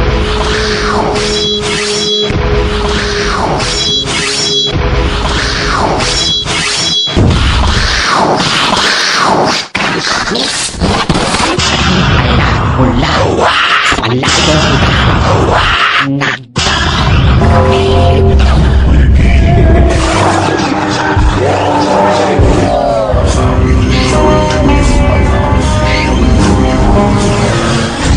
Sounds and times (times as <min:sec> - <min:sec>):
Electronic music: 0:00.0 - 0:08.2, 0:17.4 - 0:28.1
Sound effect: 0:00.0 - 0:28.1
Speech: 0:12.2 - 0:14.9.